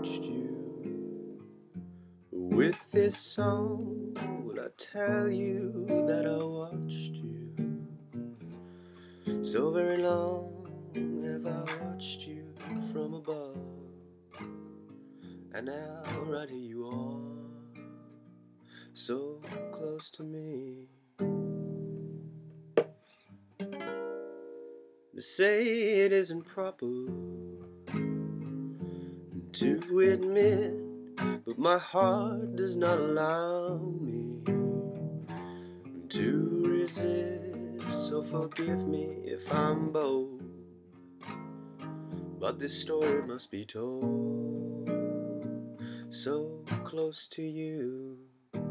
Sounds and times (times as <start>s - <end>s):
Male singing: 0.0s - 0.9s, 2.4s - 7.7s, 9.5s - 13.9s, 15.6s - 17.8s, 19.0s - 21.0s, 25.2s - 27.4s, 29.5s - 34.8s, 36.0s - 40.5s, 42.4s - 45.0s, 46.1s - 48.4s
Music: 0.0s - 25.1s, 25.8s - 48.7s.